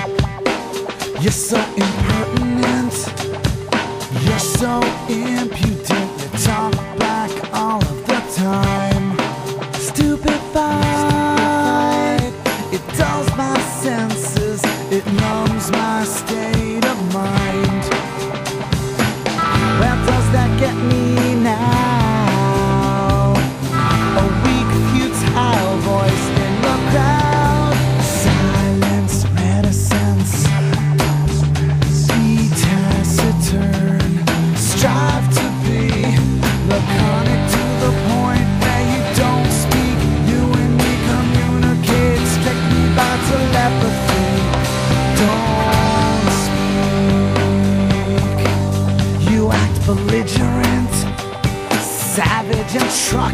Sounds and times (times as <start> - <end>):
Music: 0.0 - 53.3.